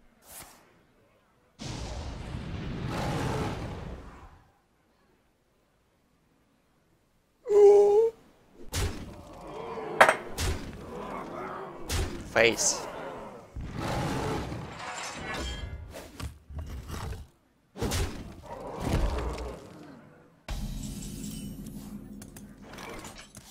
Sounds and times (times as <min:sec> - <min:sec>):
Speech: 0:12.3 - 0:12.9.